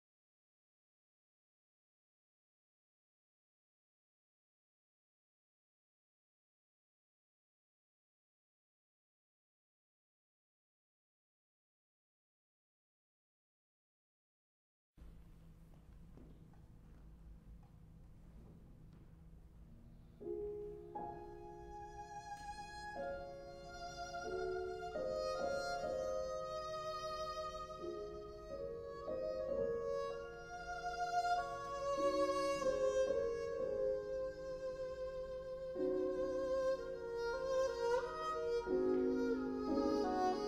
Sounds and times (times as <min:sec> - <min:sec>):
Violin, fiddle: 0:21.0 - 0:40.4.